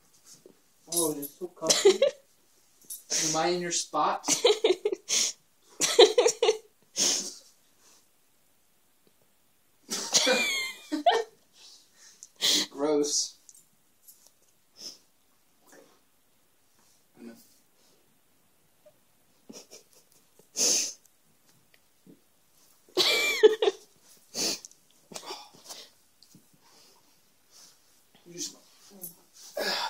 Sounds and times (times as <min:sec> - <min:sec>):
Speech: 0:03.1 - 0:04.3, 0:12.7 - 0:13.4.